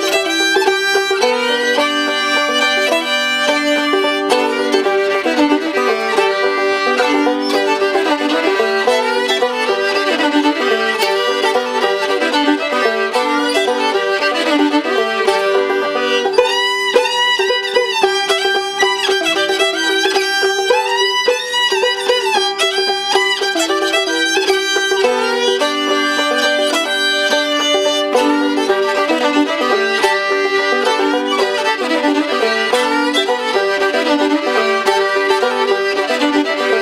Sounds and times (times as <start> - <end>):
Pizzicato: 0.0 - 36.8.